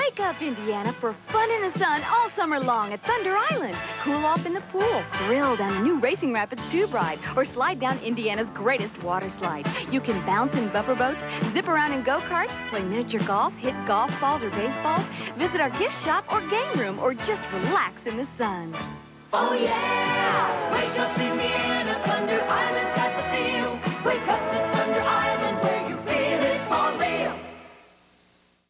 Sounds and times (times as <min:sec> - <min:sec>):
Music: 0:00.0 - 0:28.0.